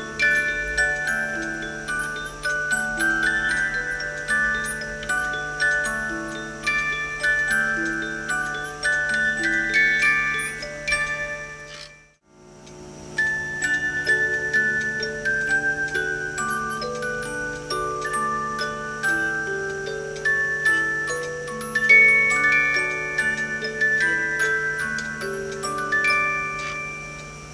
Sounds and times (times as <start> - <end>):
Music: 0.0 - 27.5.